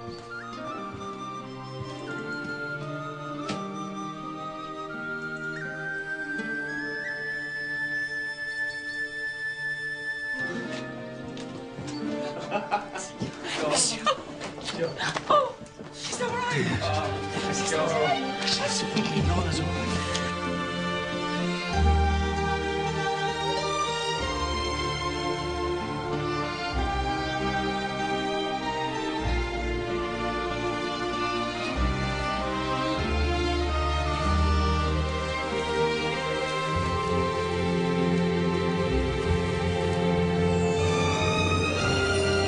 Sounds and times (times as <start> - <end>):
Speech: 16.0 - 19.8
Theme music: 16.2 - 42.4.